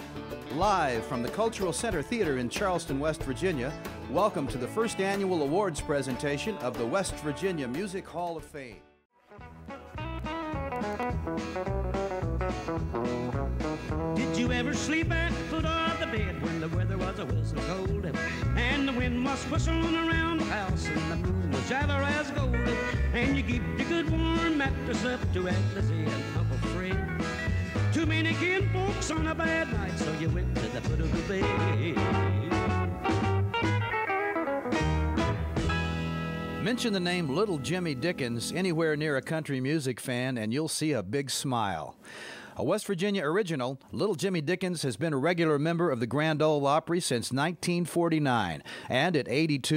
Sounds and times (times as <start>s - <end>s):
Blues: 0.0s - 39.7s.